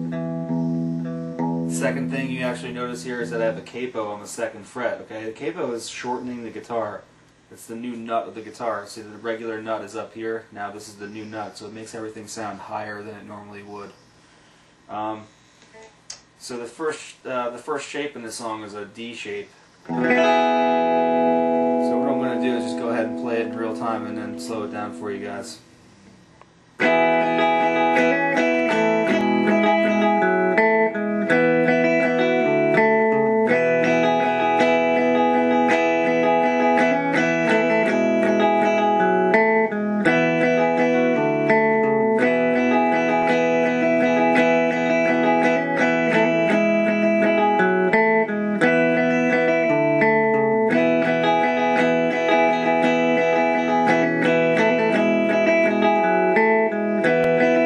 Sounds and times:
Strum: 0:00.0 - 0:05.3, 0:19.9 - 0:57.6
Speech: 0:01.7 - 0:14.0, 0:14.9 - 0:19.6, 0:21.8 - 0:25.6.

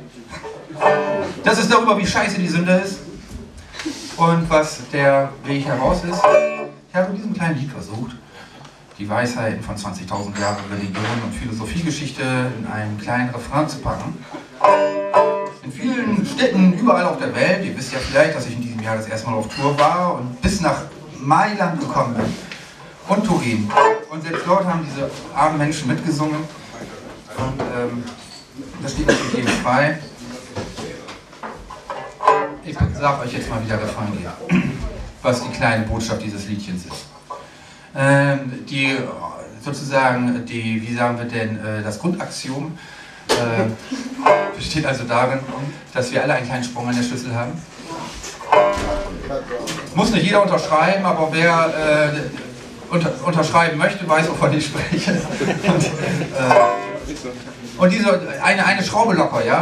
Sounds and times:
Speech: 0:00.0 - 0:03.5, 0:04.1 - 0:08.2, 0:09.0 - 0:14.6, 0:15.6 - 0:31.2, 0:32.6 - 0:37.1, 0:38.0 - 0:59.6.

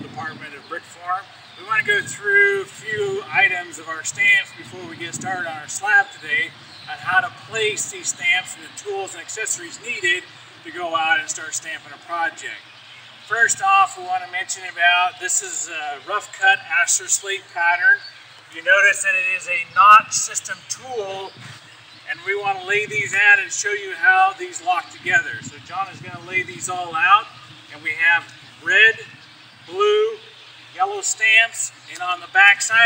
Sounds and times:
Speech: 0:00.0 - 0:12.6, 0:13.3 - 0:21.4, 0:22.1 - 0:32.8.

